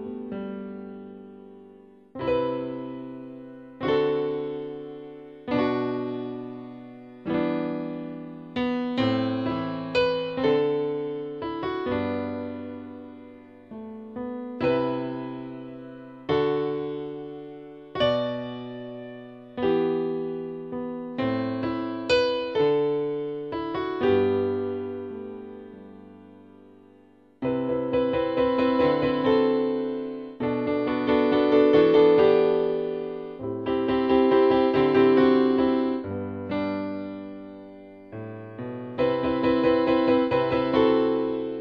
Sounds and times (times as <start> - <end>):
Music: 0.0 - 41.6.